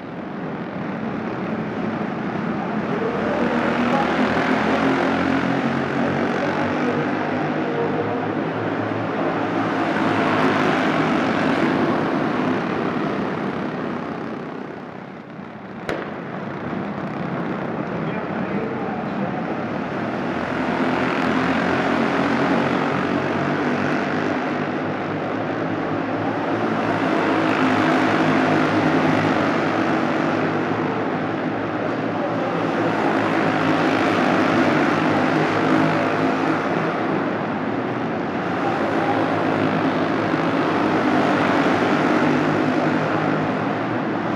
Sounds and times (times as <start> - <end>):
Inside, public space: 0.0 - 44.3
Race car, auto racing: 0.0 - 44.3.